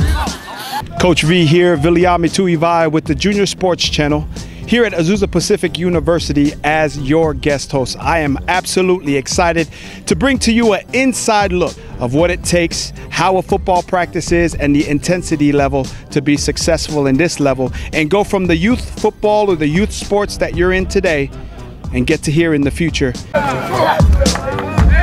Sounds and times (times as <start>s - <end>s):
Music: 0.0s - 25.0s
Speech: 0.8s - 21.3s, 21.9s - 23.2s.